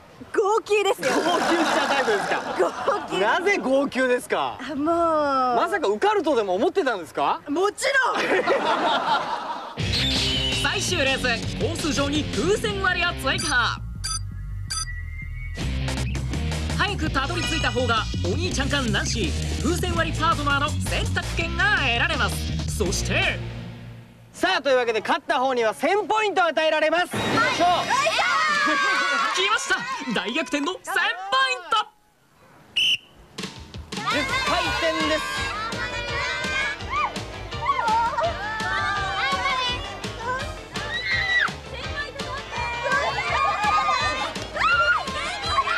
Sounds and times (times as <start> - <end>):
Music: 9.8 - 24.2, 33.4 - 45.7.